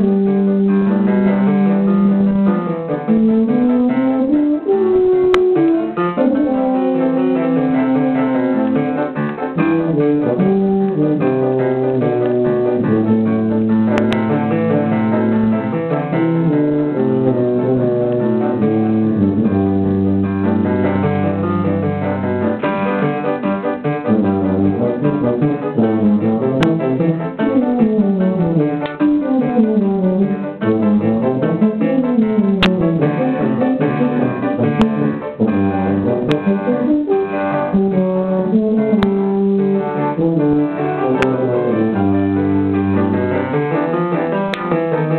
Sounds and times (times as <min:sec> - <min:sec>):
Brass instrument: 0:00.0 - 0:45.1
Classical music: 0:00.0 - 0:45.1
Piano: 0:00.0 - 0:45.1.